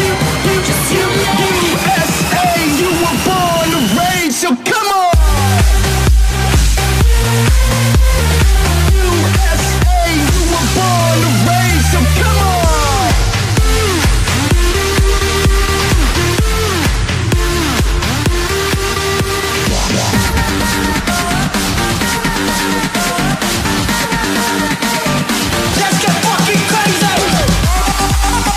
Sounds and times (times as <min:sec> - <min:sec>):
Speech: 0:00.0 - 0:05.6, 0:08.9 - 0:13.3
Music: 0:00.0 - 0:28.5.